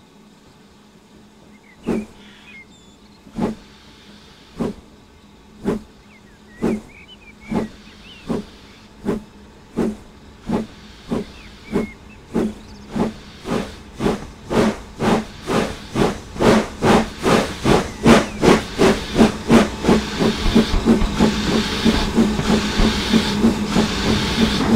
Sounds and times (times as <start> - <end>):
Hiss: 1.3 - 2.6, 3.3 - 24.7.